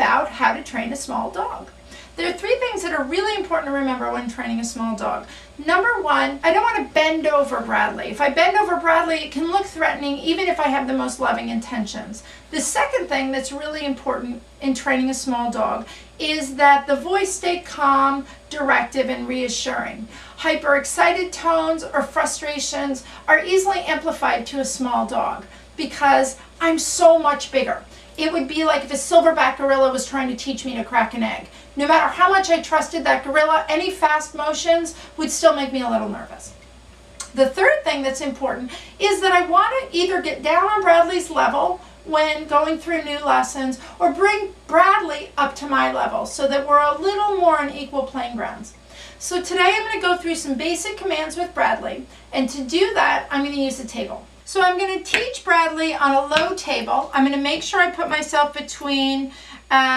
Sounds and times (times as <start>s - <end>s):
Speech: 0.0s - 36.6s, 37.2s - 59.9s.